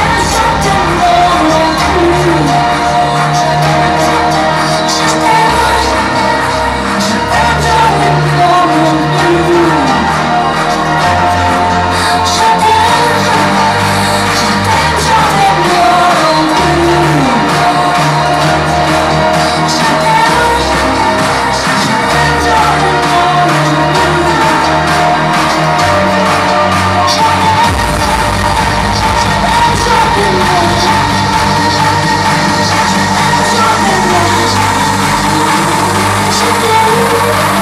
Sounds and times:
Music: 0.0 - 37.6.

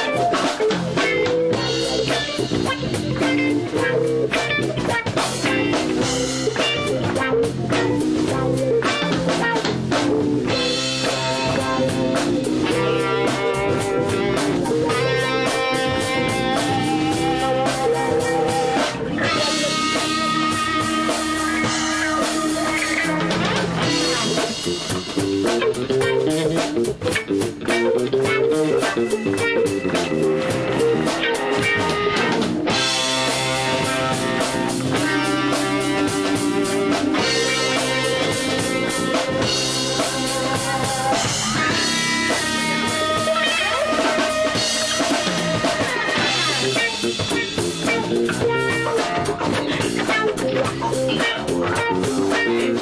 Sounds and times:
Independent music: 0.0 - 52.8.

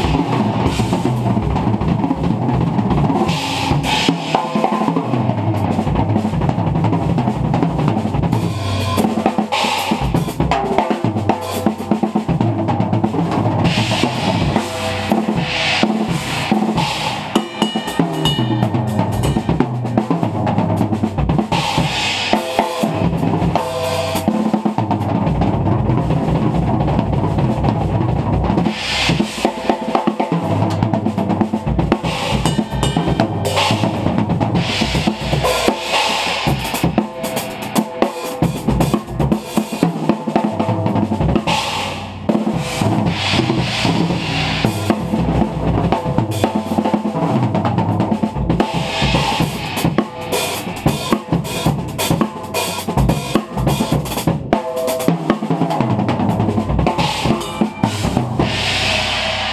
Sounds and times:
Drum kit: 0.0 - 59.5
Drum roll: 0.0 - 59.5.

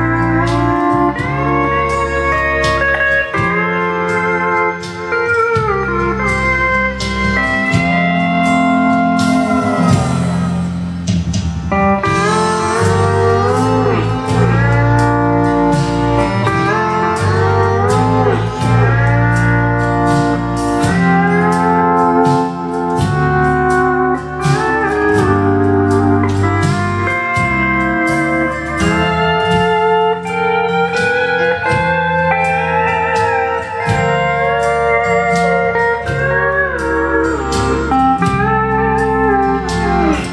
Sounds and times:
Steel guitar, slide guitar: 0.0 - 40.3.

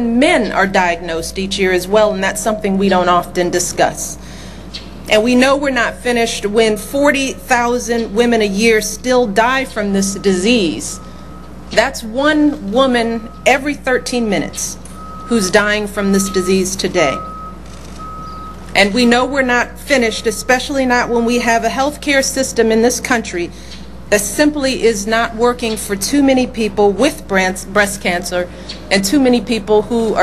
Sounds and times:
Female speech, woman speaking: 0.0 - 4.2, 5.1 - 11.0, 11.8 - 17.3, 18.8 - 30.2
Narration, monologue: 0.0 - 30.2.

